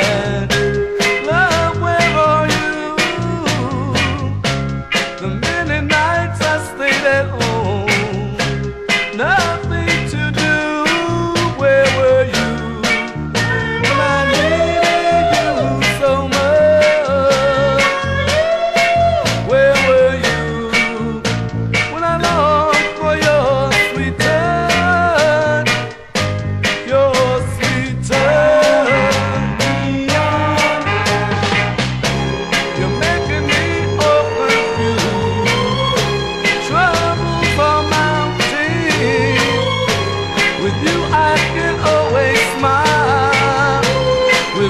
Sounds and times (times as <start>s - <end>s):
Music: 0.0s - 44.6s.